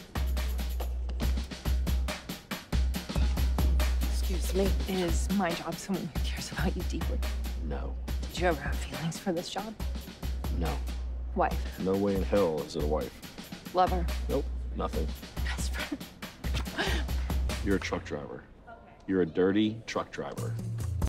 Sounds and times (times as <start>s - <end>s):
Music: 0.0s - 21.0s.